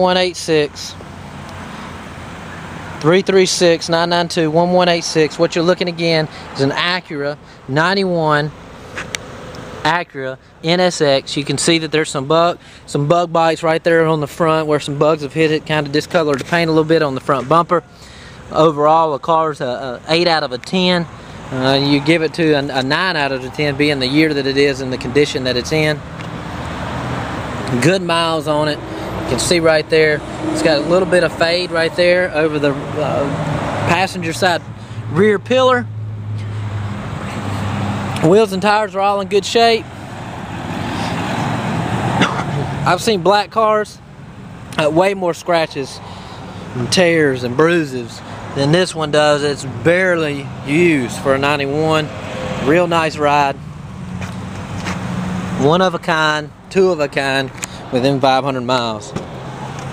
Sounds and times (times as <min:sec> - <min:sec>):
Speech: 0:00.0 - 0:01.0, 0:03.0 - 0:08.6, 0:09.8 - 0:17.9, 0:18.5 - 0:26.0, 0:27.7 - 0:35.9, 0:38.2 - 0:39.9, 0:42.8 - 0:44.0, 0:44.8 - 0:46.0, 0:46.8 - 0:53.6, 0:55.6 - 0:59.2
Motor vehicle (road): 0:00.0 - 0:59.9.